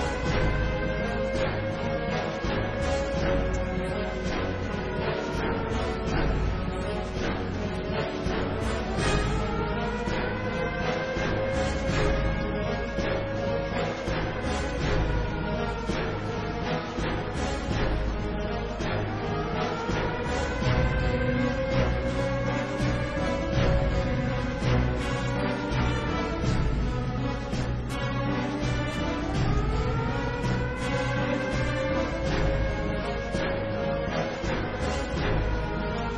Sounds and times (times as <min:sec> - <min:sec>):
Music: 0:00.0 - 0:36.1.